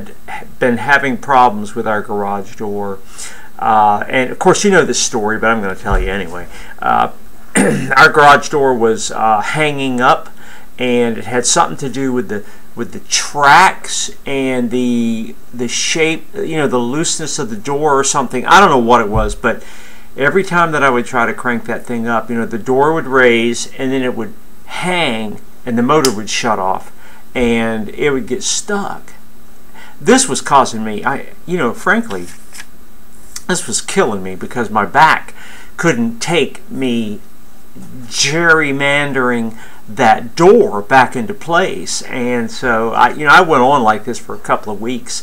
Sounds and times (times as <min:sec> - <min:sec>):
Speech: 0:00.0 - 0:03.0, 0:03.6 - 0:19.6, 0:20.2 - 0:29.2, 0:30.0 - 0:32.4, 0:33.4 - 0:37.2, 0:37.8 - 0:45.2.